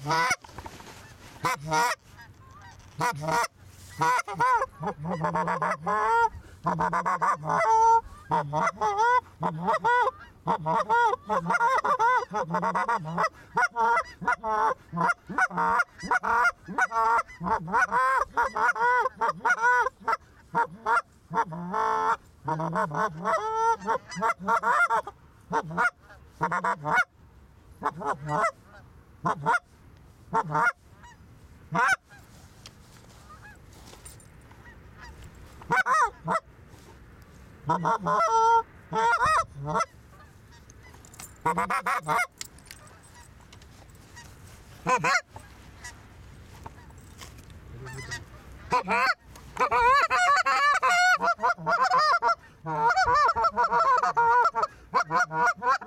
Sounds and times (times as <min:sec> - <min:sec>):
Honk: 0:00.0 - 0:27.1, 0:27.8 - 0:29.7, 0:30.3 - 0:32.4, 0:33.0 - 0:34.0, 0:34.6 - 0:36.5, 0:37.6 - 0:43.4, 0:44.0 - 0:46.0, 0:47.8 - 0:55.8.